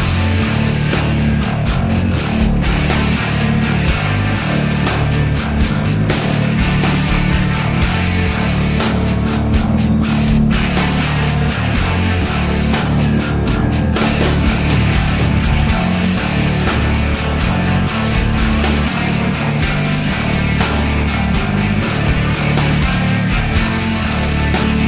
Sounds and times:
Exciting music: 0.0s - 24.8s.

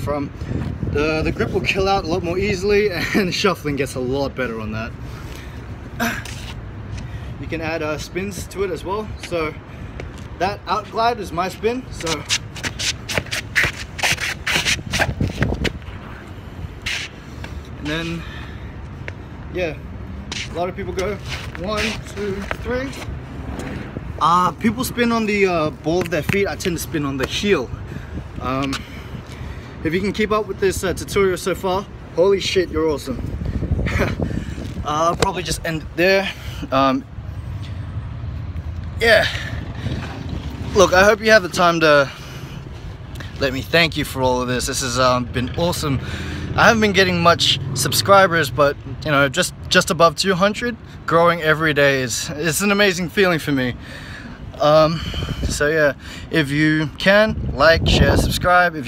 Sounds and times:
Speech: 10.4s - 12.3s.

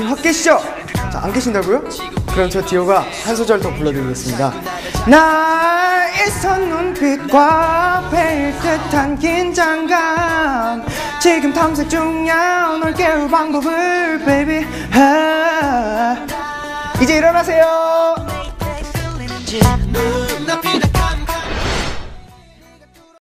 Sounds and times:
Music: 0.0s - 23.2s.

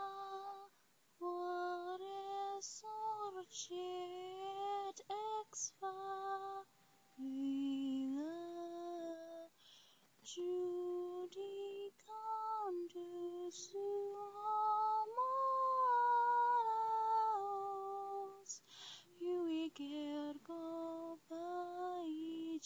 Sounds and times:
Lullaby: 0.0s - 22.6s.

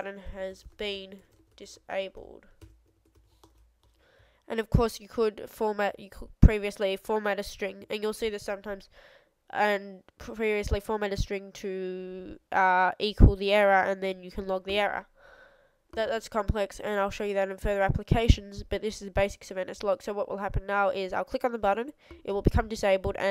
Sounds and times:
Speech: 0.0s - 2.4s, 4.5s - 8.9s, 9.5s - 15.1s, 16.0s - 23.3s.

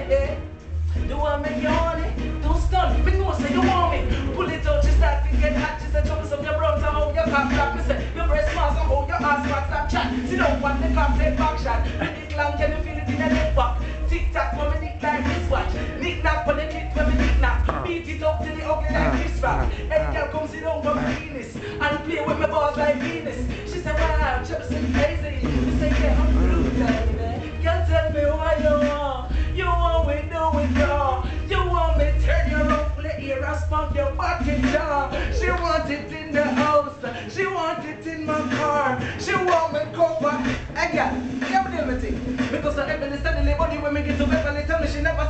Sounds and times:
Reggae: 0.0s - 45.3s.

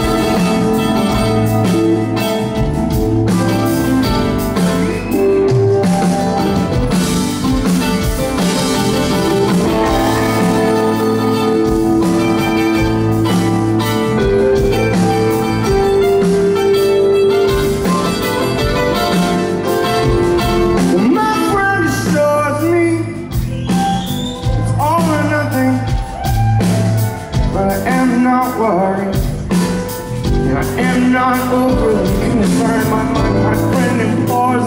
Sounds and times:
Rhythm and blues: 0.0s - 34.6s.

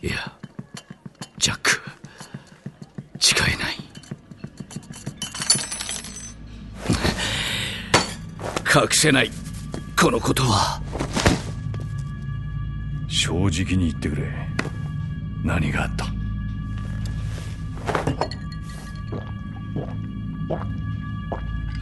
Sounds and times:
Music: 0.0s - 21.8s
Speech: 2.6s - 3.9s, 13.1s - 14.5s, 15.4s - 16.2s.

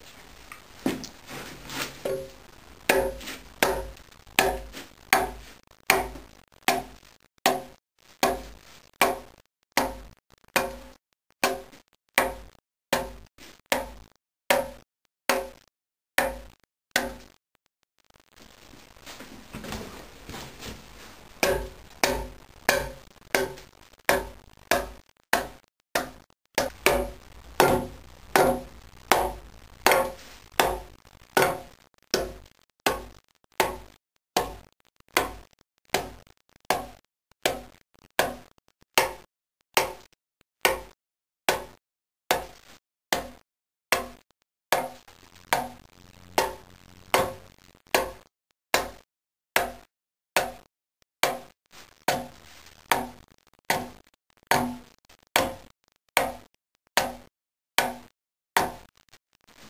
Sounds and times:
Wood: 0.0s - 15.6s, 16.2s - 17.4s, 18.4s - 39.2s, 39.8s - 40.1s, 40.7s - 41.8s, 43.2s - 43.4s, 44.0s - 44.2s, 44.8s - 49.0s, 52.1s - 56.4s, 57.8s - 58.9s.

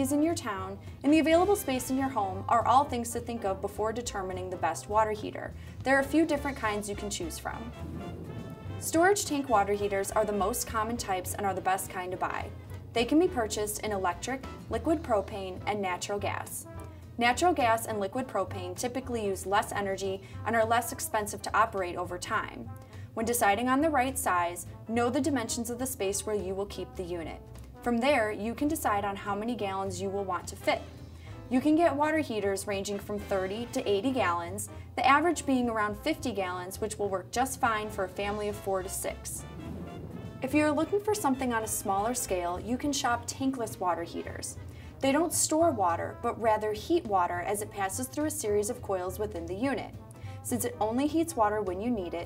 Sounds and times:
Speech: 0.0s - 7.7s, 8.8s - 30.9s, 31.5s - 39.4s, 40.4s - 49.9s, 50.5s - 52.2s
Music: 0.0s - 52.2s.

